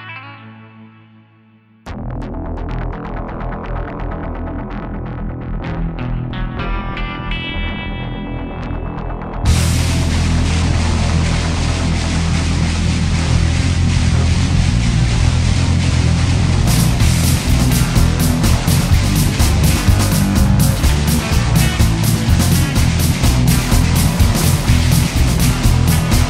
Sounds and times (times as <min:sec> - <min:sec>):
Music: 0:00.0 - 0:26.2.